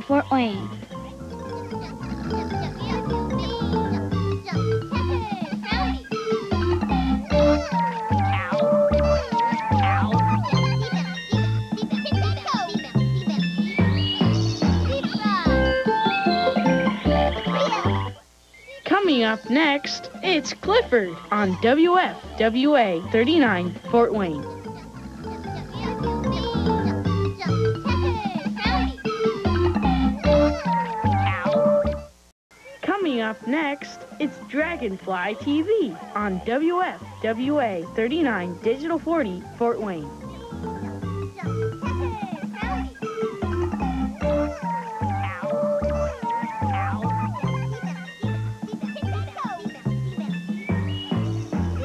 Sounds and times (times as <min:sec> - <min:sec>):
Speech: 0:00.0 - 0:00.9, 0:08.2 - 0:11.2, 0:18.7 - 0:24.6, 0:32.6 - 0:40.1
Music: 0:00.0 - 0:18.3, 0:18.9 - 0:32.3, 0:32.9 - 0:51.8.